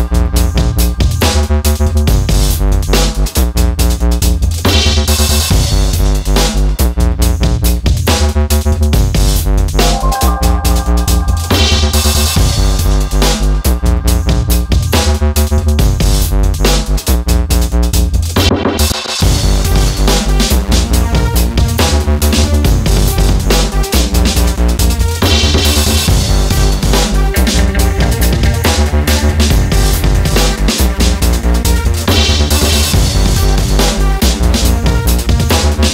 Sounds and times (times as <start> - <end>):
Music: 0.0 - 35.9.